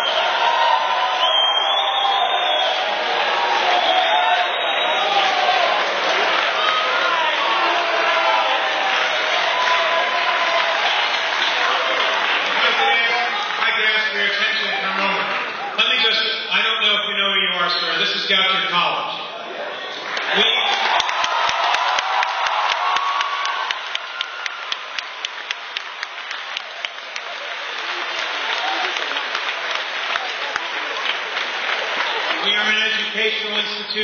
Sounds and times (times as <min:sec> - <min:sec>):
Male speech, man speaking: 0:12.6 - 0:19.3, 0:20.3 - 0:20.8, 0:32.4 - 0:34.0.